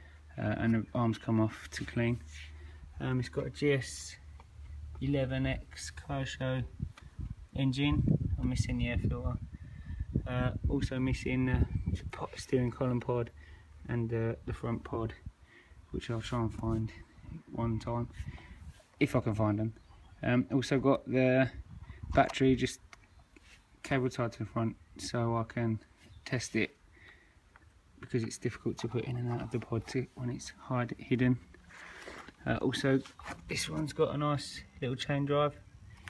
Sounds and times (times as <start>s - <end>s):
Speech: 0.3s - 2.4s, 3.0s - 4.3s, 5.0s - 6.8s, 7.5s - 9.4s, 10.2s - 15.3s, 15.9s - 18.2s, 19.0s - 22.8s, 23.8s - 26.8s, 28.0s - 31.4s, 32.4s - 35.6s.